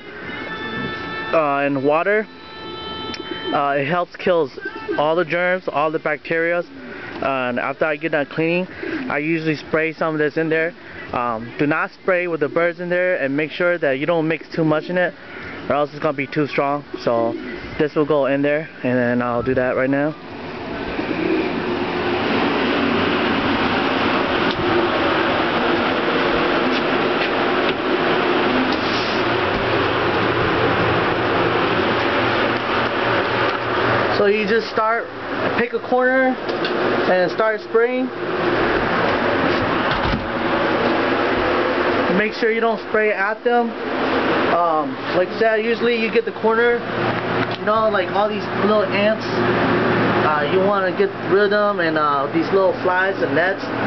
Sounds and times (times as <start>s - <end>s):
Speech: 1.4s - 2.3s, 3.6s - 20.2s, 34.1s - 36.4s, 37.1s - 38.2s, 42.1s - 43.8s, 44.5s - 46.9s, 47.6s - 49.5s, 50.2s - 53.8s.